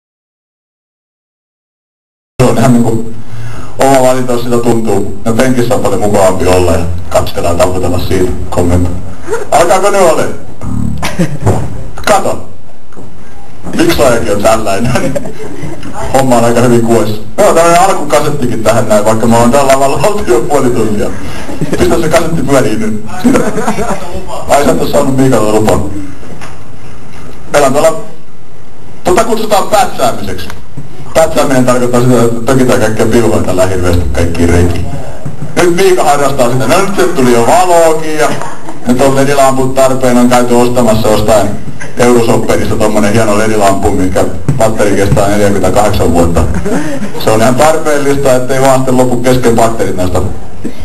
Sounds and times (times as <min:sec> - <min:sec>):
Speech: 0:02.4 - 0:03.1, 0:03.8 - 0:11.0, 0:12.0 - 0:12.6, 0:13.7 - 0:15.2, 0:15.8 - 0:26.1, 0:27.5 - 0:28.2, 0:29.1 - 0:46.5, 0:47.2 - 0:50.4.